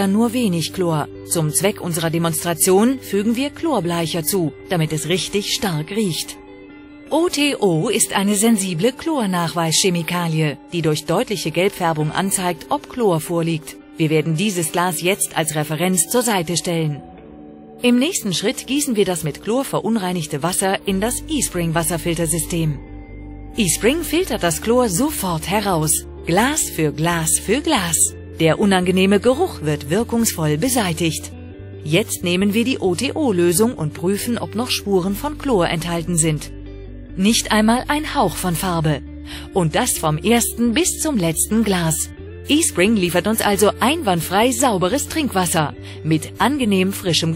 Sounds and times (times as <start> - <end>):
Speech: 0.0 - 6.4, 7.1 - 17.0, 17.8 - 22.8, 23.6 - 36.5, 37.2 - 47.3
Music: 0.0 - 47.3.